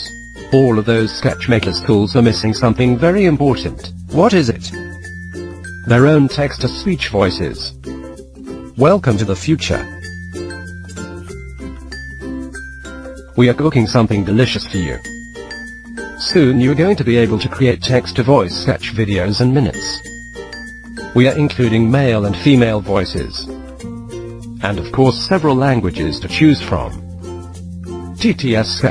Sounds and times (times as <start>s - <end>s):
Music: 0.0s - 28.9s.